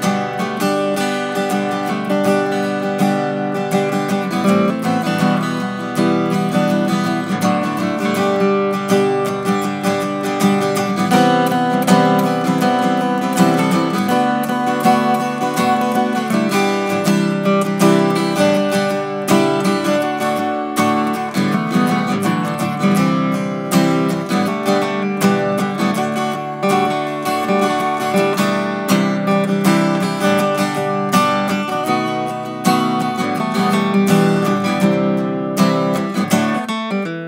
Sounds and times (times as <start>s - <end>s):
Strum: 0.0s - 37.2s.